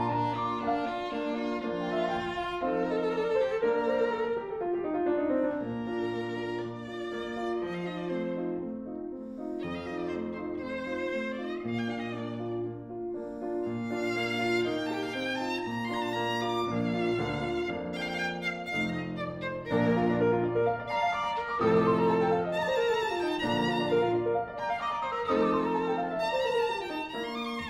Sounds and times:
Violin, fiddle: 0.0 - 8.7, 9.5 - 27.6.

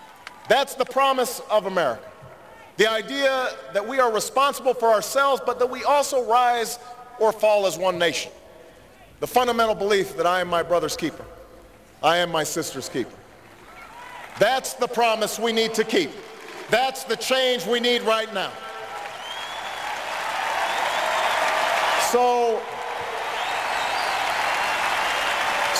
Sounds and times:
Narration, monologue: 0.0 - 19.0, 21.8 - 23.0
Male speech, man speaking: 0.5 - 2.0, 2.8 - 8.3, 9.2 - 11.2, 12.0 - 13.1, 14.4 - 18.9, 22.0 - 22.7.

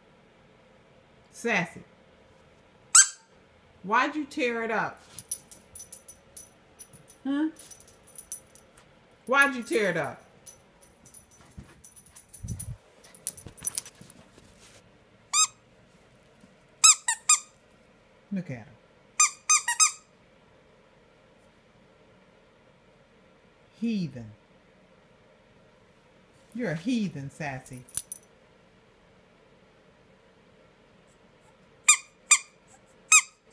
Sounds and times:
Speech: 1.3 - 1.9, 3.8 - 5.0, 9.3 - 10.2, 18.3 - 18.8, 23.7 - 24.4, 26.5 - 27.9.

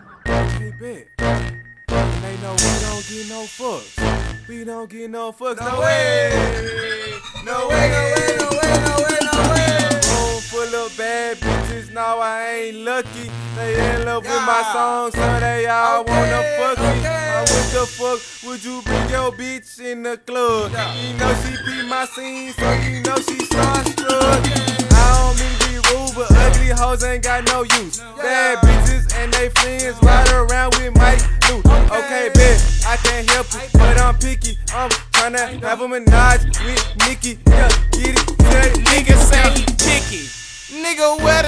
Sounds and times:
Music: 0.0 - 4.8, 5.8 - 6.8, 7.5 - 14.4, 15.0 - 19.9, 20.5 - 41.4.

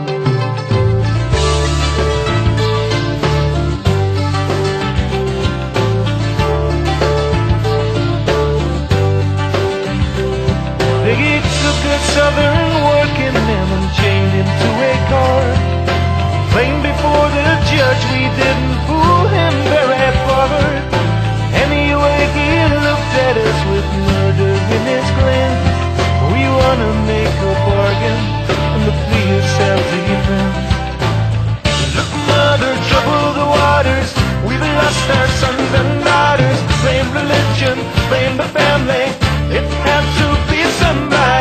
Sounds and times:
Country: 0.0 - 41.4.

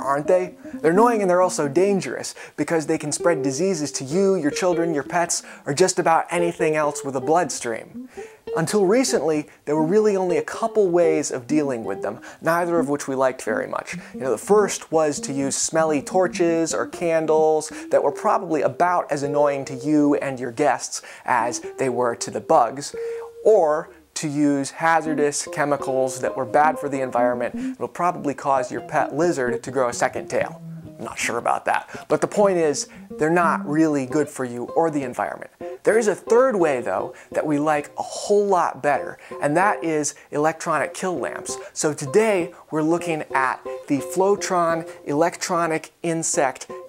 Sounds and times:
Music: 0.0 - 46.8
Speech: 0.0 - 46.8.

